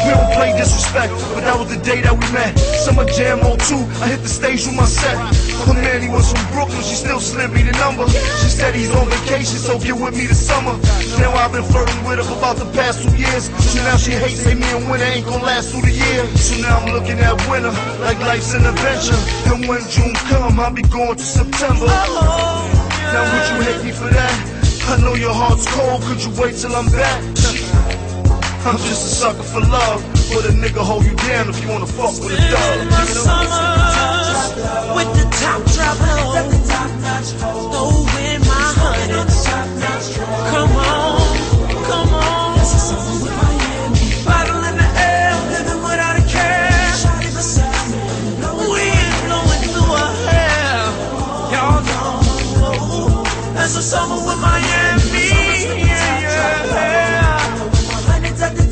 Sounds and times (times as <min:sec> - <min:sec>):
Hip hop music: 0:00.0 - 0:58.7
Rhythm and blues: 0:00.0 - 0:58.7.